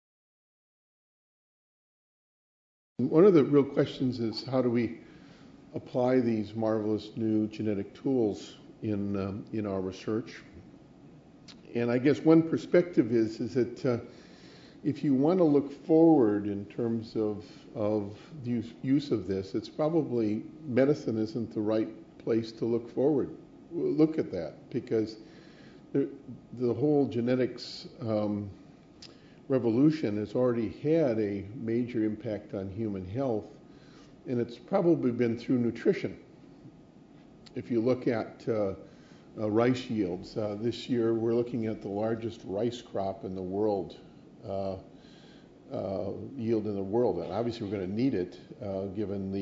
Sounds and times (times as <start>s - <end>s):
Speech: 3.0s - 5.0s, 5.7s - 10.6s, 11.5s - 14.2s, 14.8s - 25.3s, 25.9s - 33.6s, 34.3s - 36.3s, 37.5s - 44.9s, 45.7s - 49.4s.